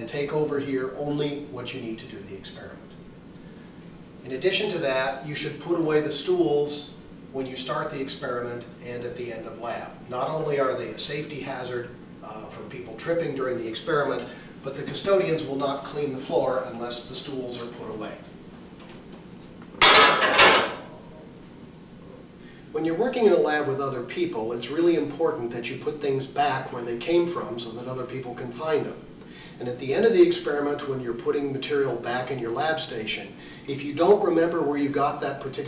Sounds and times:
Speech: 0:00.0 - 0:03.0, 0:04.2 - 0:18.4, 0:22.0 - 0:35.6.

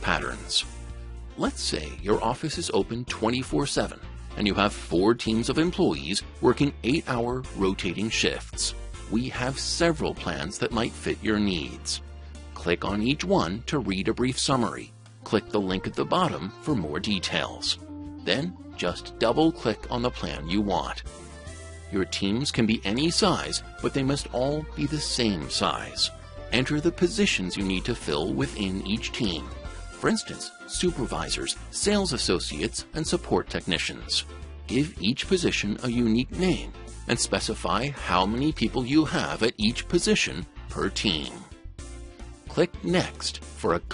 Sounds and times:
Speech: 0:00.0 - 0:00.7, 0:01.4 - 0:12.0, 0:12.6 - 0:21.0, 0:21.9 - 0:41.6, 0:42.5 - 0:43.9
Music: 0:00.0 - 0:43.9.

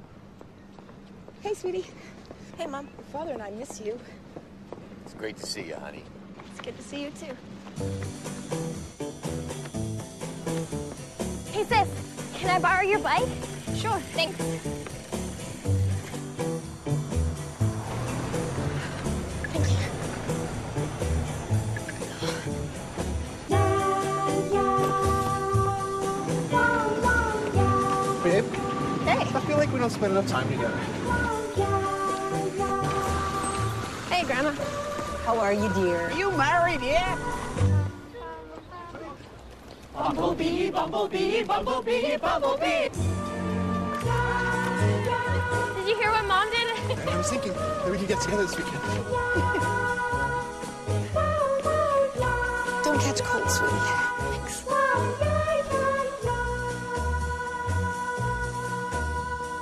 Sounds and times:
Outside, urban or manmade: 0:00.0 - 0:59.6
Outside, rural or natural: 0:06.0 - 0:59.6
Music: 0:06.8 - 0:38.2, 0:40.4 - 0:59.6.

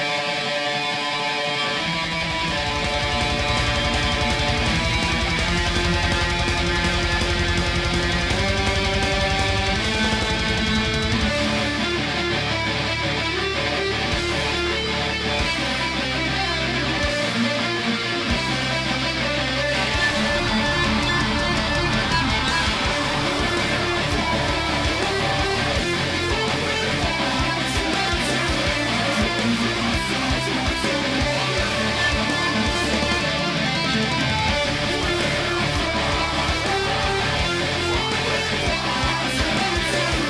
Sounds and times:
Music: 0:00.0 - 0:40.3.

